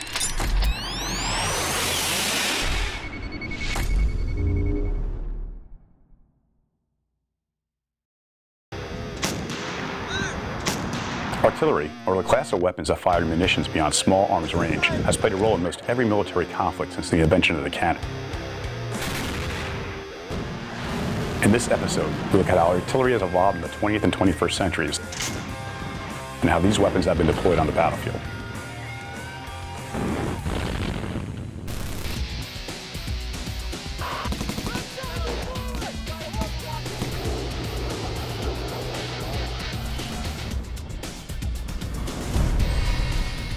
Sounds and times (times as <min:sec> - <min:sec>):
Music: 0:08.8 - 0:30.8, 0:31.7 - 0:43.5
Artillery fire: 0:09.2 - 0:11.5, 0:18.9 - 0:22.5, 0:30.0 - 0:32.4, 0:34.1 - 0:35.3, 0:36.8 - 0:40.4
Speech: 0:11.4 - 0:18.0, 0:21.4 - 0:25.1, 0:26.4 - 0:28.2, 0:34.7 - 0:37.0.